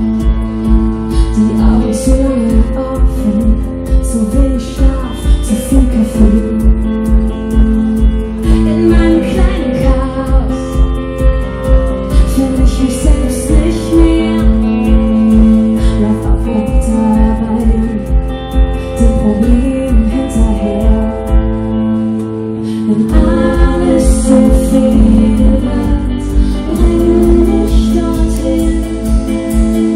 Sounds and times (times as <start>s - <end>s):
Music: 0.0s - 29.9s.